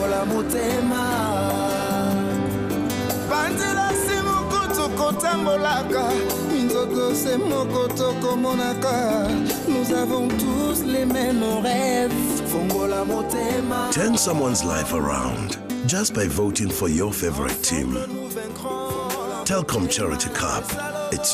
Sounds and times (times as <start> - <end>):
Music: 0.0 - 21.3
Speech: 13.9 - 18.2, 19.3 - 21.3.